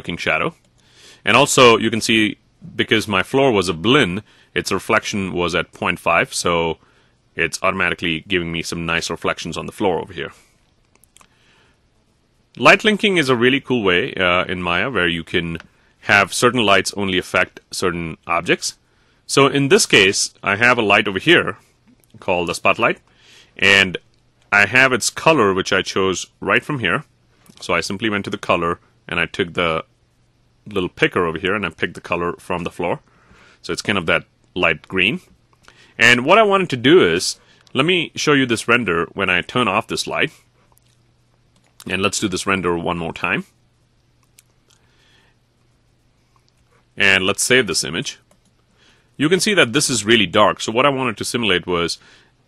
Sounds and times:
Narration, monologue: 0.0 - 52.4.

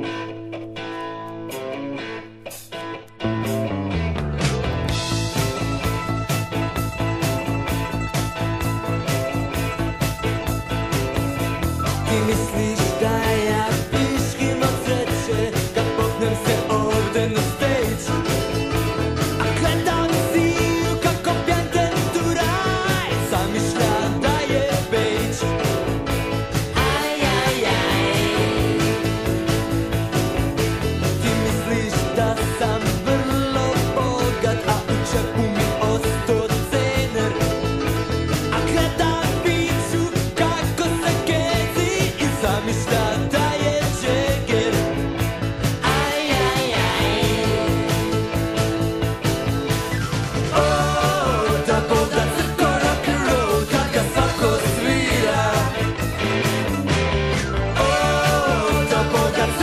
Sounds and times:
Rock and roll: 0.0 - 59.6.

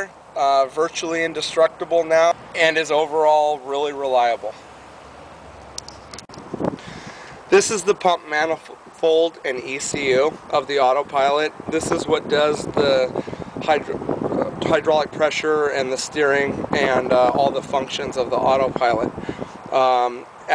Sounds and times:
Speech: 0.0 - 4.6, 7.5 - 20.5.

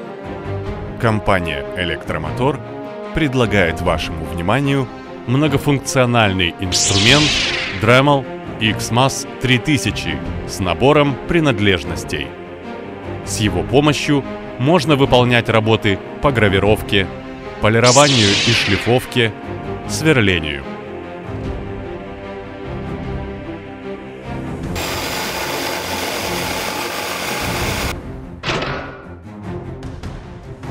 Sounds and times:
Music: 0.0 - 30.7
Speech: 1.0 - 12.3, 13.3 - 20.7
Dental drill, dentist's drill: 24.8 - 27.9.

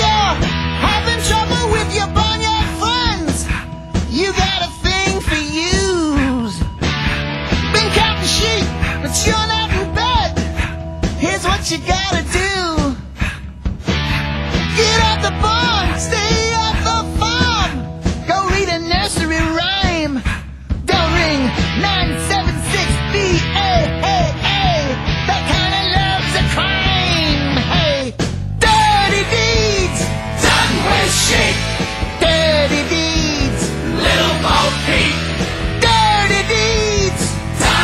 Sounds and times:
Music: 0.0 - 37.8.

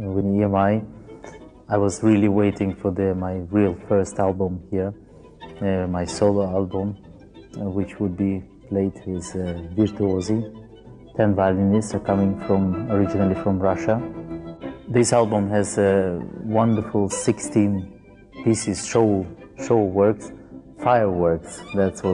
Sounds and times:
Speech: 0.0 - 0.9, 1.7 - 5.0, 5.6 - 7.0, 7.6 - 10.5, 11.2 - 14.1, 14.9 - 17.9, 18.5 - 22.1
Music: 0.0 - 22.1.

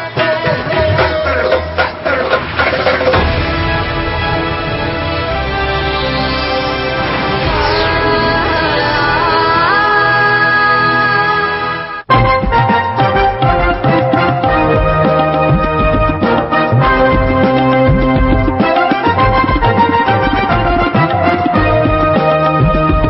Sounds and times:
Music: 0.0 - 23.0.

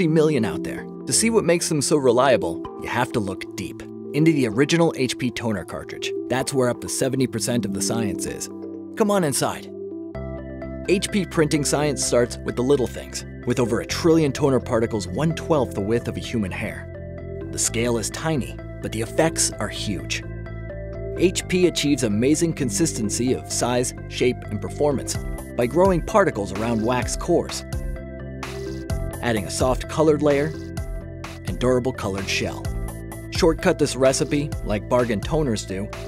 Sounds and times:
Speech: 0.0 - 9.7, 10.9 - 16.9, 17.5 - 20.2, 21.2 - 27.6, 29.2 - 30.6, 31.5 - 32.7, 33.3 - 35.9
Music: 0.0 - 36.0.

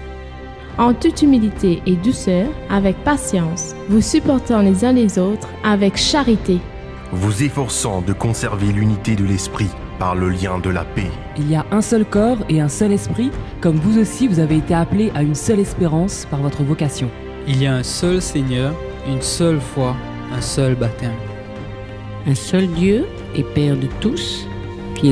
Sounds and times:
Music: 0.0 - 25.1
Speech: 0.8 - 21.2.

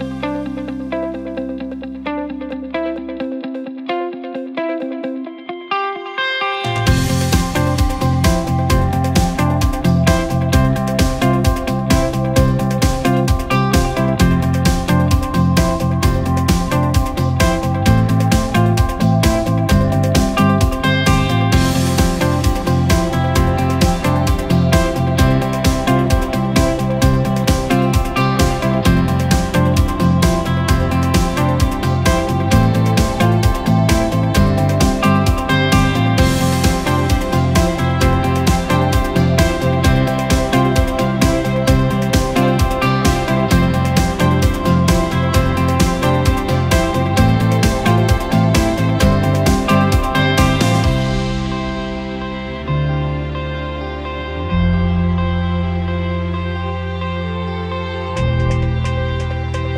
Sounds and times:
Music: 0.0 - 59.7.

